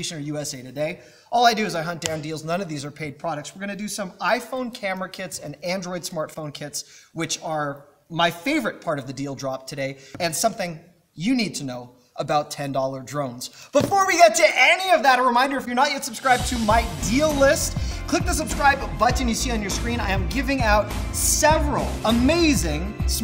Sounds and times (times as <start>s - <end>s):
Speech: 0.0s - 23.2s
Music: 16.2s - 23.2s.